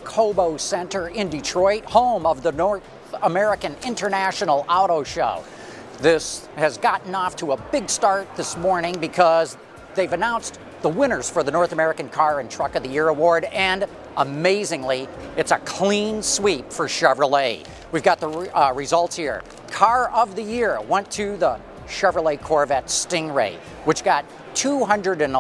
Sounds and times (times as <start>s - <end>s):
Speech: 0.0s - 5.4s, 6.0s - 25.4s
Music: 0.0s - 25.4s.